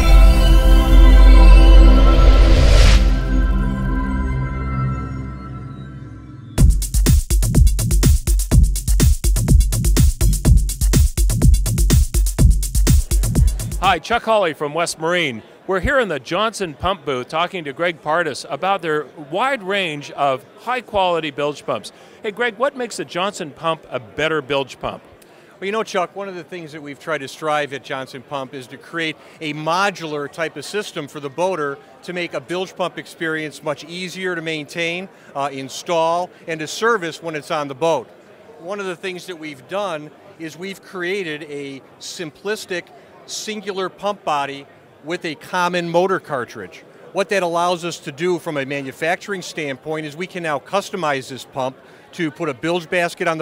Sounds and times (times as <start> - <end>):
Speech: 13.6 - 53.4.